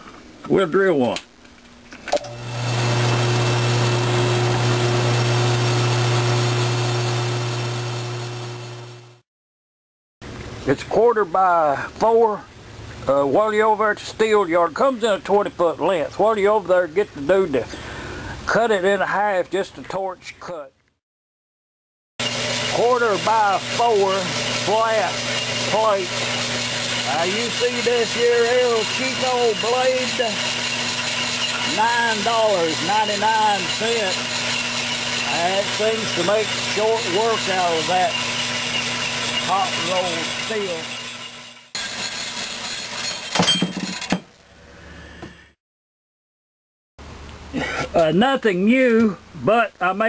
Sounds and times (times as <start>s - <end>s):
Speech: 0.4s - 1.3s, 10.6s - 17.8s, 18.5s - 20.8s, 22.7s - 26.1s, 27.1s - 30.4s, 31.7s - 34.2s, 35.3s - 38.2s, 39.5s - 40.9s, 47.6s - 50.0s.